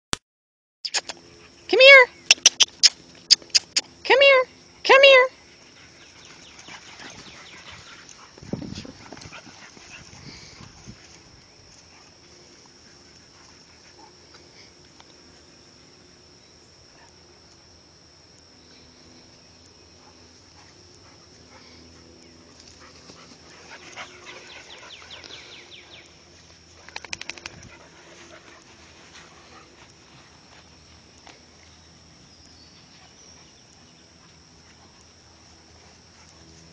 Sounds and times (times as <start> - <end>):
Speech: 1.7 - 2.2, 4.0 - 5.4.